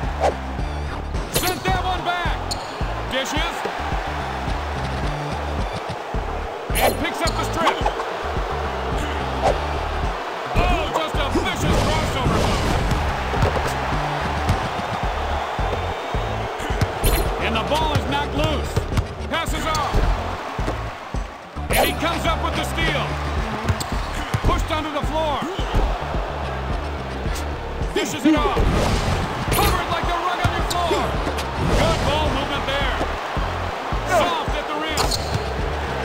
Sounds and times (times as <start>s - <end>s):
Music: 0.0s - 36.0s
Speech: 1.4s - 2.4s, 3.1s - 3.6s, 6.9s - 7.8s, 10.6s - 12.4s, 17.4s - 20.1s, 21.7s - 23.1s, 24.4s - 25.6s, 27.9s - 28.6s, 29.5s - 31.2s, 31.8s - 33.0s, 34.1s - 35.3s.